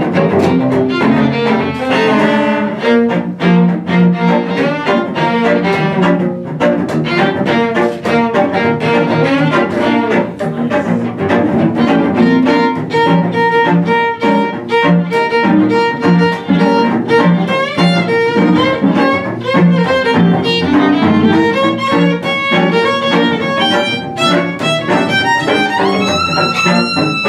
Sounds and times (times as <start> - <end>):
Cello: 0.0 - 27.2
Double bass: 0.0 - 27.2
Violin, fiddle: 0.0 - 27.2.